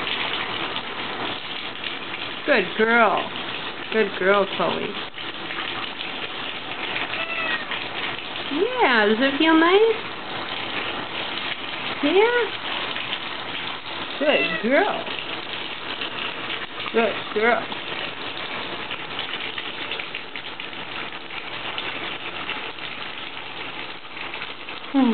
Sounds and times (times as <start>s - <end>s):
Speech: 2.5s - 3.3s, 3.9s - 5.0s, 8.5s - 10.0s, 12.0s - 12.6s, 14.2s - 15.1s, 16.9s - 17.7s
Meow: 7.1s - 7.8s, 14.4s - 14.7s.